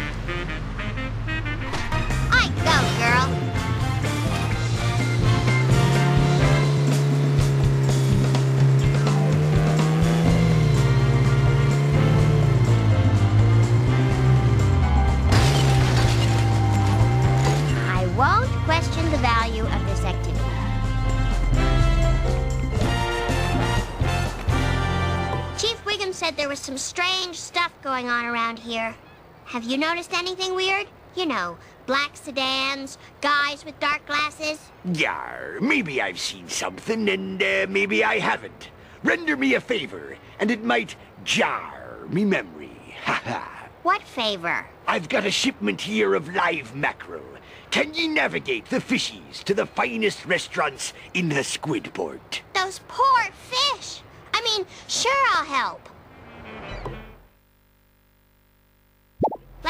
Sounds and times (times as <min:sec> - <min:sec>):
Music: 0:00.0 - 0:25.8
Speech: 0:17.8 - 0:20.4, 0:25.6 - 0:55.9.